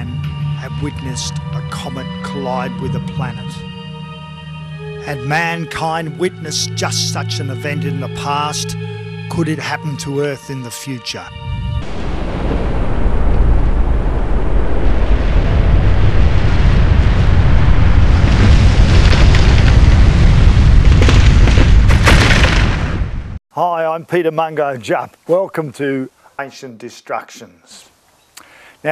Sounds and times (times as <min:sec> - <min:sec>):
Speech: 0:00.0 - 0:03.6, 0:05.0 - 0:11.3, 0:23.5 - 0:27.9
Music: 0:00.0 - 0:12.2.